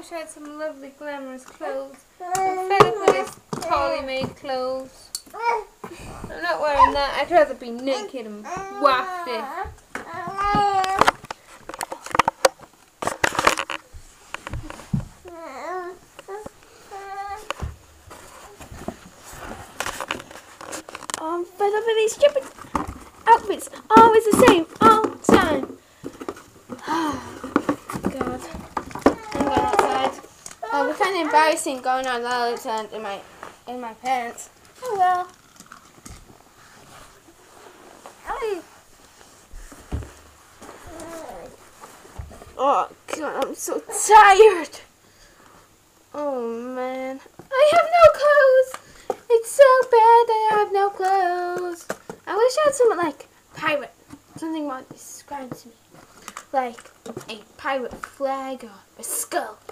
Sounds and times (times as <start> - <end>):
Inside, small room: 0.0 - 59.7
Babbling: 2.2 - 4.0, 5.3 - 5.8, 7.9 - 11.1, 15.3 - 17.6, 29.0 - 31.4, 40.9 - 41.6.